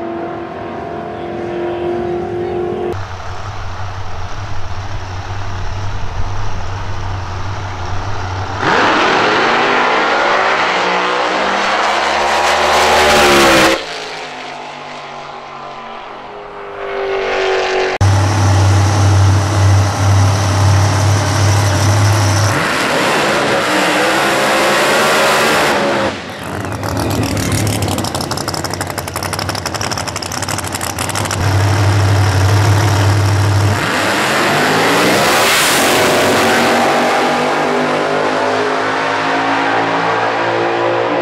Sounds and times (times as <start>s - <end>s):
Outside, urban or manmade: 0.0s - 41.2s
Race car, auto racing: 0.0s - 41.2s.